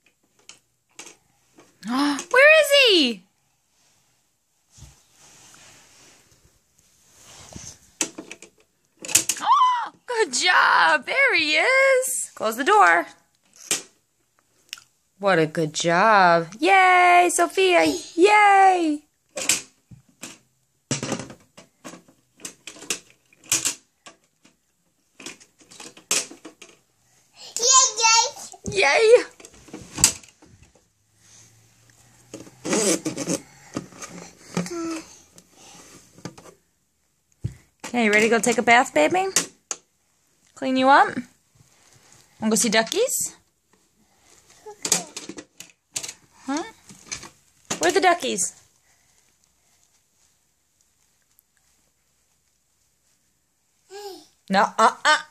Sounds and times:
Inside, small room: 0:00.0 - 0:55.3
Child speech, kid speaking: 0:17.7 - 0:18.2, 0:27.4 - 0:29.3.

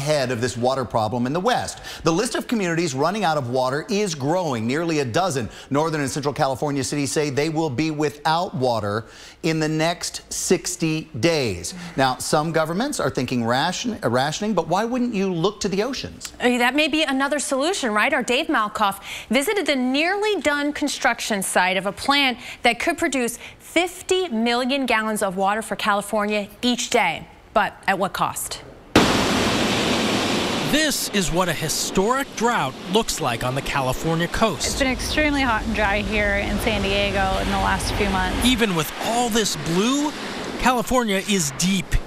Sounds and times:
Waves, surf: 0:29.0 - 0:42.0.

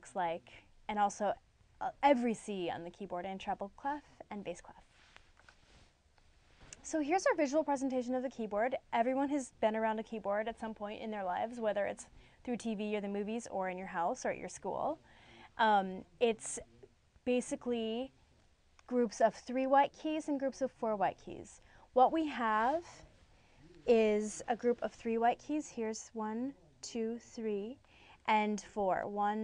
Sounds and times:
Speech: 0:00.0 - 0:04.8, 0:06.8 - 0:15.0, 0:15.6 - 0:18.1, 0:18.9 - 0:23.0, 0:23.6 - 0:29.4.

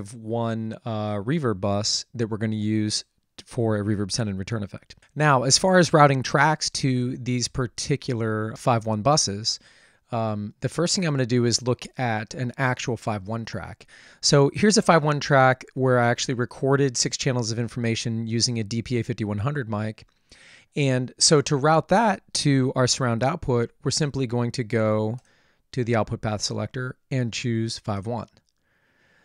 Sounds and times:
Speech: 0:00.0 - 0:20.1, 0:20.8 - 0:28.4.

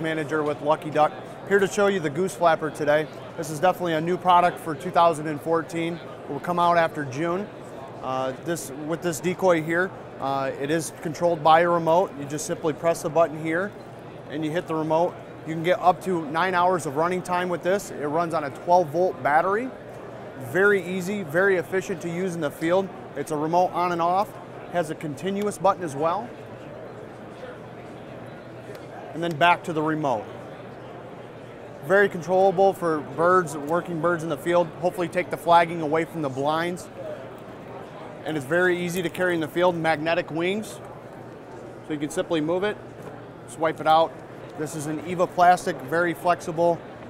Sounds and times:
Speech: 0:00.0 - 0:19.8, 0:20.4 - 0:26.4, 0:28.6 - 0:30.4, 0:31.8 - 0:37.2, 0:38.2 - 0:40.9, 0:41.9 - 0:42.8, 0:43.5 - 0:47.0.

